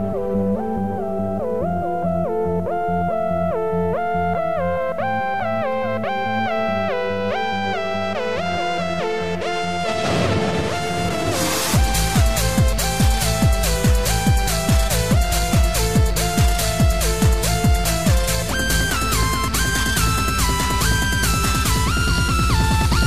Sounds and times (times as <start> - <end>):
Trance music: 0.0 - 23.0.